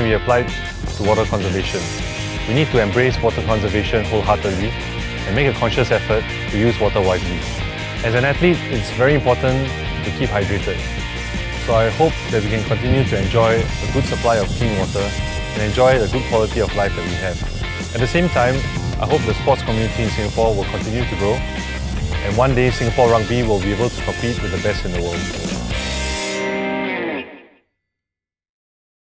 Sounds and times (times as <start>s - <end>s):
Speech: 0.0s - 4.7s, 5.3s - 10.8s, 11.6s - 21.4s, 22.2s - 25.4s
Music: 0.0s - 27.8s.